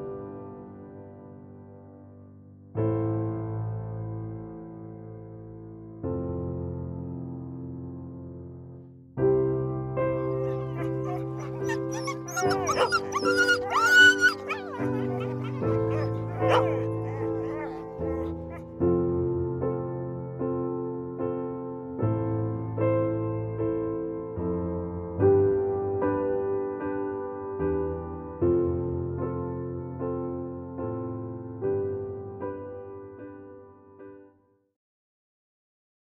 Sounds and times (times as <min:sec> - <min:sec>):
Music: 0:00.0 - 0:34.6.